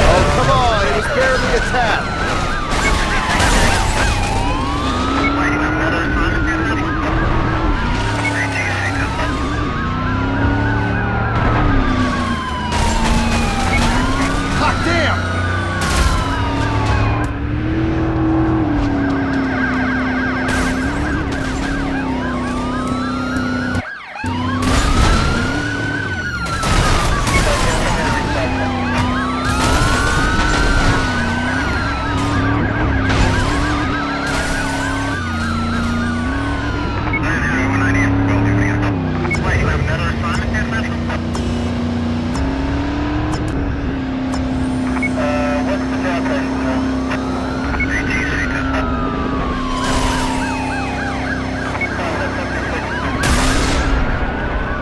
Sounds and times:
Car: 0.0 - 54.8.

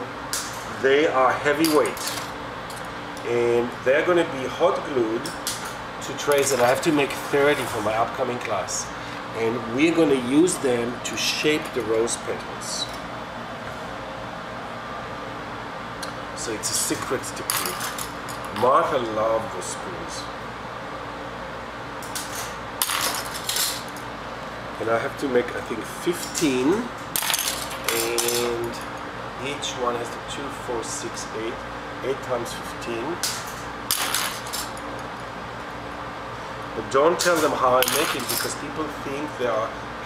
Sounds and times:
Speech: 0.7 - 2.1, 3.2 - 5.3, 6.0 - 13.0, 16.4 - 17.9, 18.5 - 20.3, 24.8 - 26.9, 27.9 - 28.8, 29.4 - 33.4, 36.8 - 39.8.

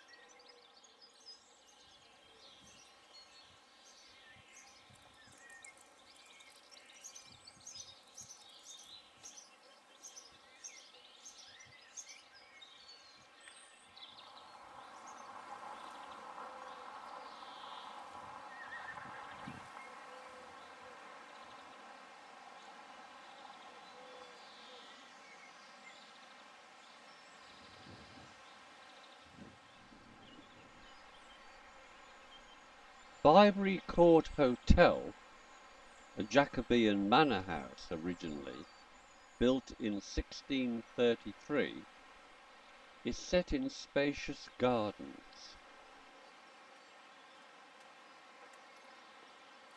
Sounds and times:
Chirp, tweet: 0.0 - 33.3, 37.6 - 40.4, 46.2 - 49.7.

